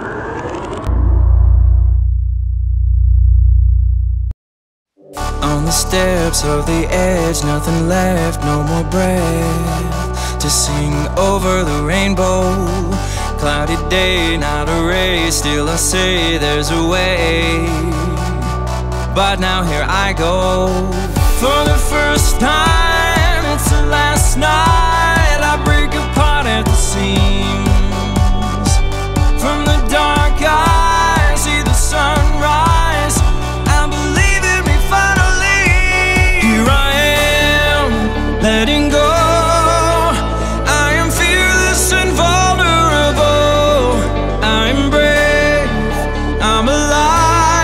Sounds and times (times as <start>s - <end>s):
Soul music: 5.0s - 47.6s.